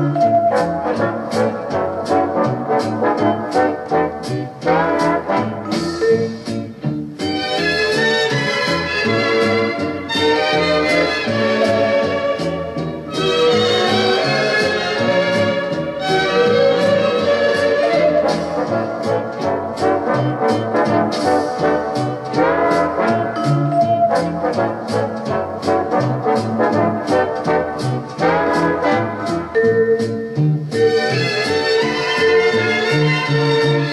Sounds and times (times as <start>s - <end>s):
Music: 0.0s - 33.9s.